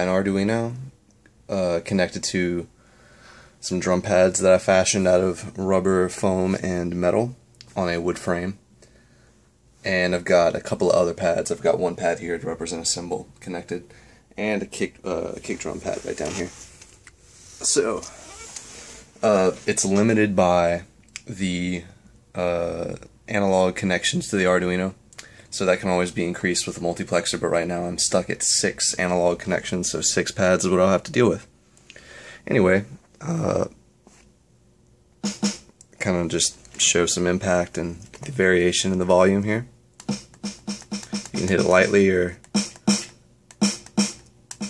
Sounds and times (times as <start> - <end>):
Speech: 0.0 - 2.7, 3.6 - 8.6, 9.8 - 16.6, 17.6 - 18.3, 19.2 - 31.5, 32.4 - 33.8, 36.0 - 39.8, 41.4 - 42.4.